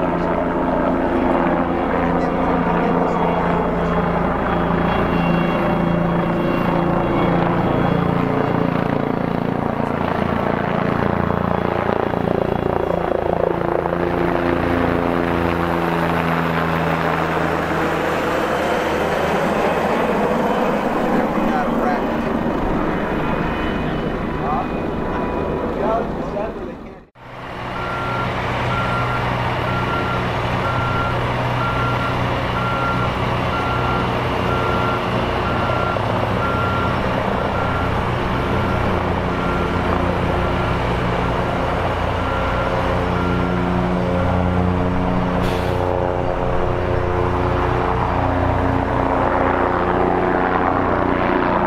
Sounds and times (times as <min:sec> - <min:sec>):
Helicopter: 0:00.0 - 0:51.6.